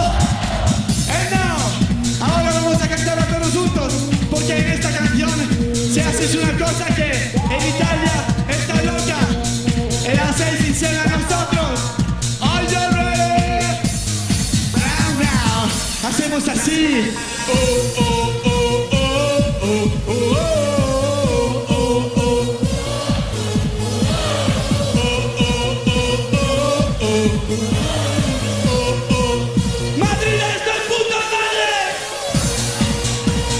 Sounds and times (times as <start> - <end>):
Dance music: 0.0 - 33.5
Disco: 0.0 - 33.5.